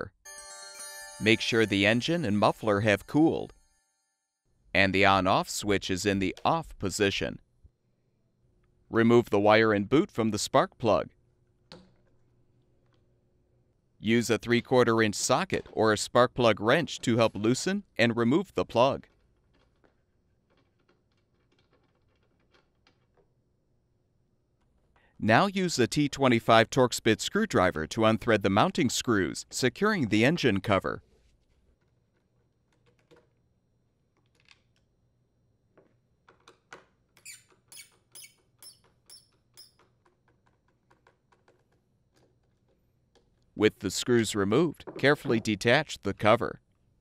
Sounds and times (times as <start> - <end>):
Speech: 1.2 - 3.5, 4.8 - 7.4, 8.9 - 11.1, 14.0 - 19.1, 25.2 - 31.0, 43.6 - 46.6.